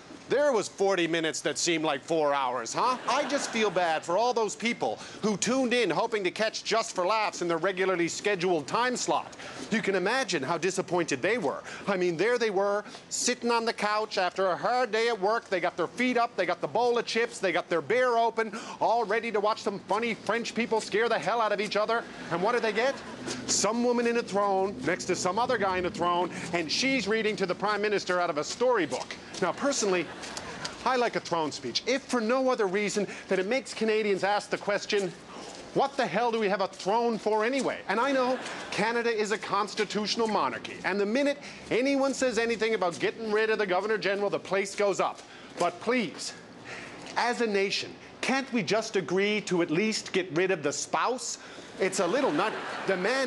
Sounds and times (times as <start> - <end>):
Narration, monologue: 0.0 - 53.2
Male speech, man speaking: 0.3 - 30.2, 30.8 - 46.4, 47.2 - 53.2.